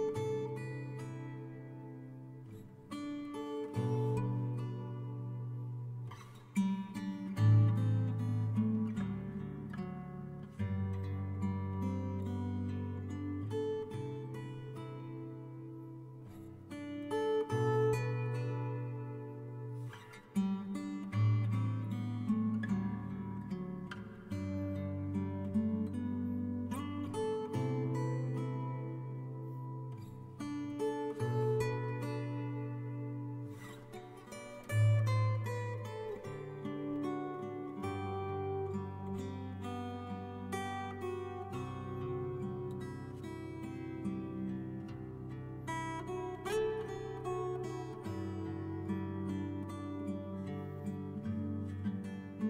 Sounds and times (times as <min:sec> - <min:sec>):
Acoustic guitar: 0:00.0 - 0:52.5.